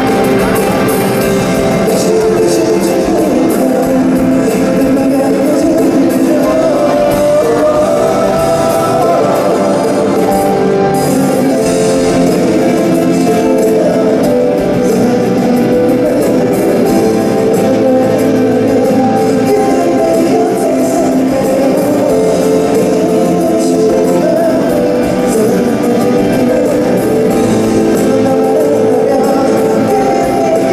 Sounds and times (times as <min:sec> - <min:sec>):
Music: 0:00.0 - 0:30.7.